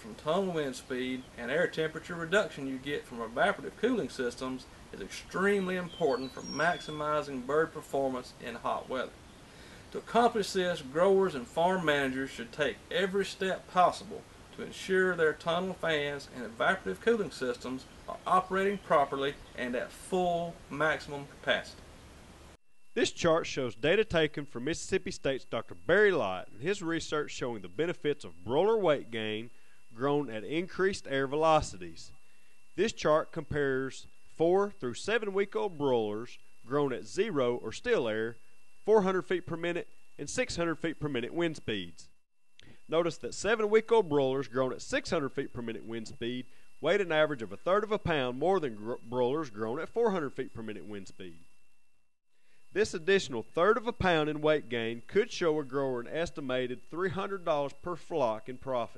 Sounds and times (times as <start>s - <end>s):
Speech: 0.0s - 9.2s, 9.9s - 21.8s, 23.0s - 32.2s, 32.8s - 42.1s, 42.9s - 51.4s, 52.8s - 58.9s.